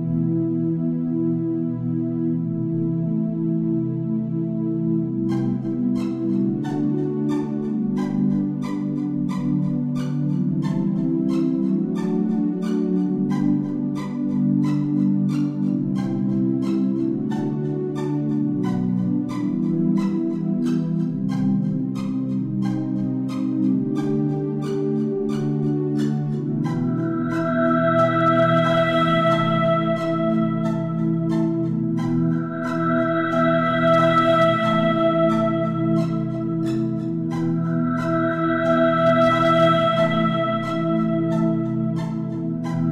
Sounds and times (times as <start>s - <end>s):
Music: 0.0s - 42.9s.